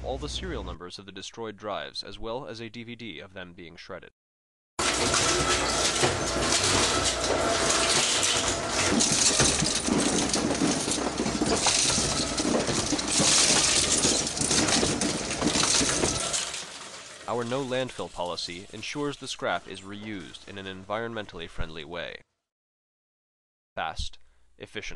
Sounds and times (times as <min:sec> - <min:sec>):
Speech: 0:00.0 - 0:04.1, 0:17.3 - 0:22.2, 0:23.8 - 0:24.9.